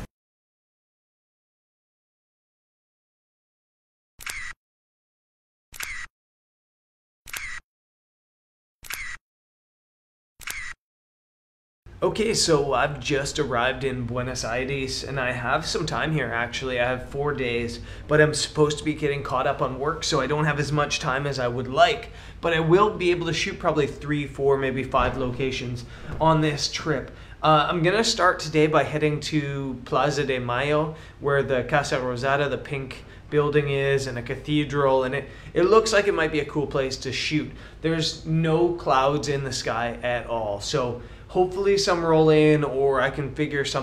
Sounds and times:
Single-lens reflex camera: 0:04.2 - 0:04.6, 0:05.8 - 0:06.1, 0:07.3 - 0:07.6, 0:08.8 - 0:09.2, 0:10.4 - 0:10.8
Inside, small room: 0:11.9 - 0:43.8
Speech: 0:12.0 - 0:43.8.

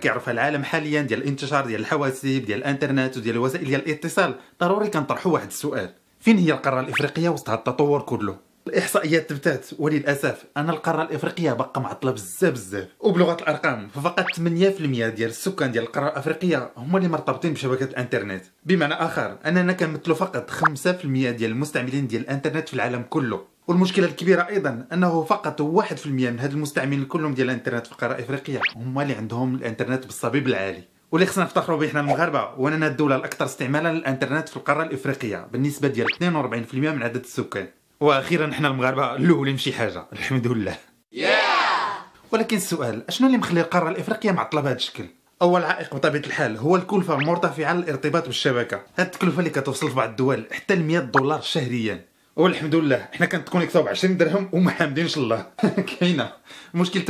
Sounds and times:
Speech: 0:00.0 - 0:57.1.

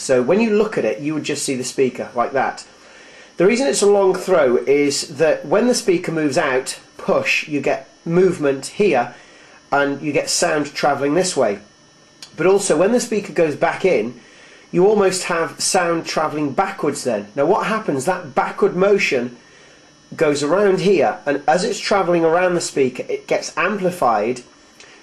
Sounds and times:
Speech: 0:00.0 - 0:02.7, 0:03.4 - 0:19.4, 0:20.1 - 0:24.5.

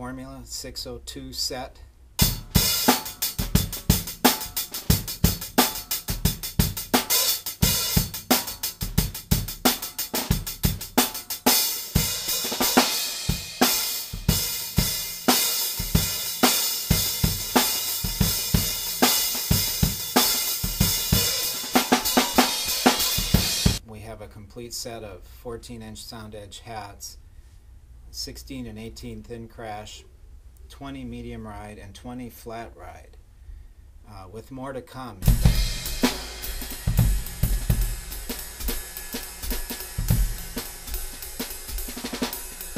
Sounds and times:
Speech: 0:00.0 - 0:01.9, 0:23.8 - 0:27.2, 0:28.1 - 0:33.2, 0:34.0 - 0:35.3
Music: 0:02.2 - 0:23.8, 0:35.2 - 0:42.7.

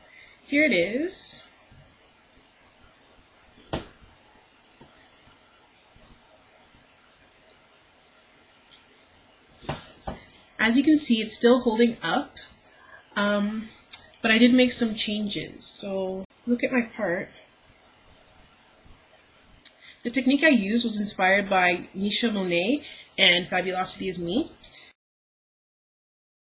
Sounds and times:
Speech: 0:00.5 - 0:01.6, 0:10.6 - 0:12.6, 0:13.2 - 0:17.5, 0:20.0 - 0:24.8.

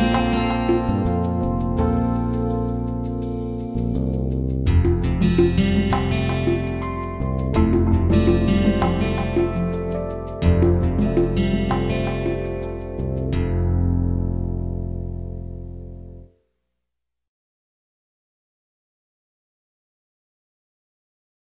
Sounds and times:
Music: 0:00.0 - 0:16.7.

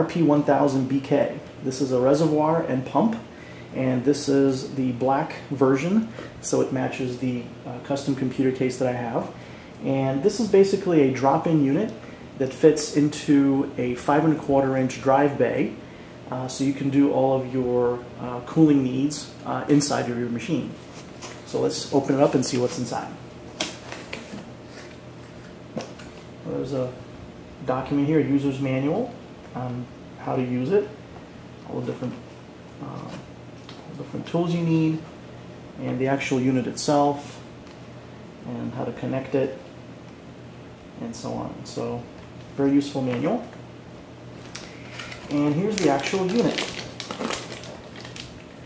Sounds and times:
Speech: 0:00.0 - 0:20.8, 0:21.5 - 0:23.2, 0:26.4 - 0:27.0, 0:27.6 - 0:31.0, 0:31.6 - 0:32.2, 0:32.8 - 0:33.3, 0:33.9 - 0:35.1, 0:35.8 - 0:37.4, 0:38.4 - 0:39.6, 0:41.0 - 0:43.6, 0:45.3 - 0:46.8.

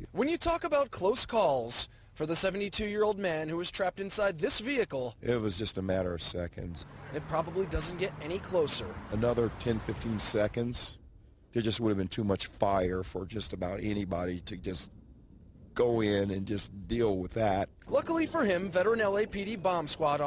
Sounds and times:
Speech: 0:00.0 - 0:11.0, 0:11.6 - 0:14.9, 0:15.8 - 0:20.2.

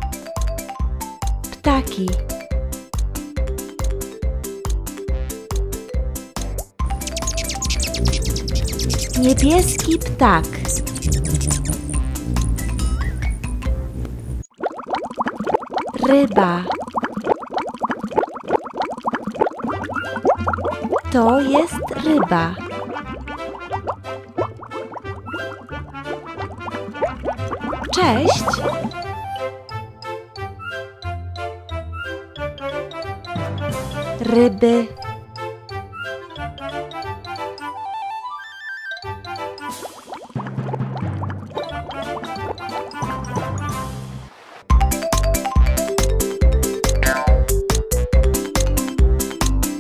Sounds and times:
Music for children: 0:00.0 - 0:14.0, 0:20.0 - 0:49.8
Speech: 0:01.6 - 0:02.2, 0:09.2 - 0:10.8, 0:16.0 - 0:16.8, 0:21.1 - 0:22.6, 0:27.9 - 0:28.8, 0:34.2 - 0:35.0.

